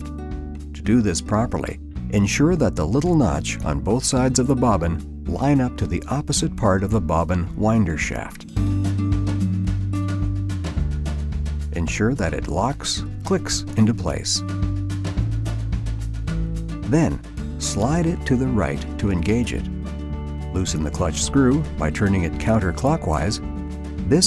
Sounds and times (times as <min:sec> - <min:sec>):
Music: 0:00.0 - 0:24.2
Speech: 0:00.8 - 0:08.5, 0:11.8 - 0:14.5, 0:16.9 - 0:19.7, 0:20.5 - 0:23.4, 0:24.0 - 0:24.2.